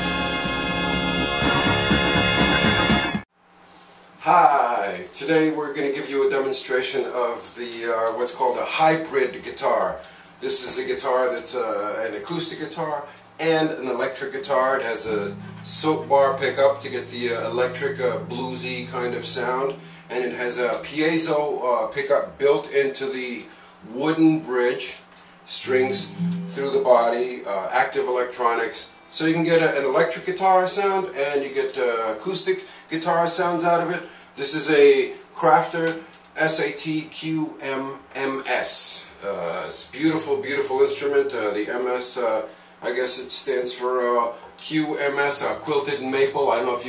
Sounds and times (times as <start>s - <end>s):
Music: 0.0s - 3.3s, 13.0s - 22.4s, 24.8s - 32.1s, 39.5s - 41.5s, 44.2s - 46.8s
Speech: 4.2s - 46.8s.